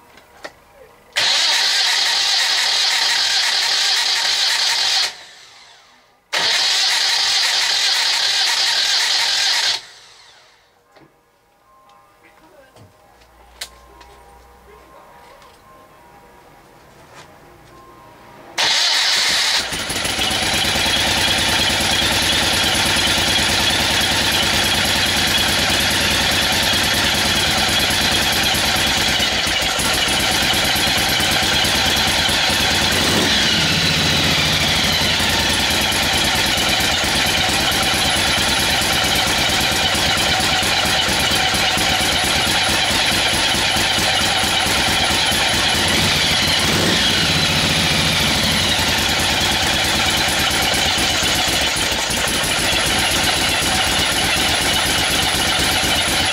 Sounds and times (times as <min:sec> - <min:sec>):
Vehicle: 0:00.0 - 0:10.7, 0:16.8 - 0:56.3
Medium engine (mid frequency): 0:01.2 - 0:10.7, 0:18.6 - 0:56.3
Music: 0:10.7 - 0:18.6.